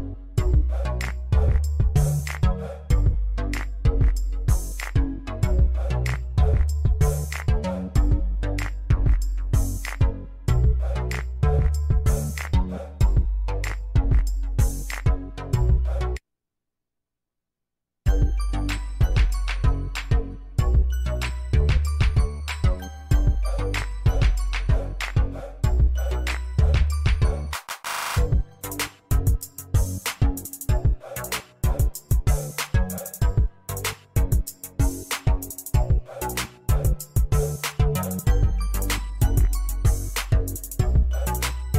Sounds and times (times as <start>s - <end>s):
Music: 0.0s - 16.2s, 18.1s - 41.7s.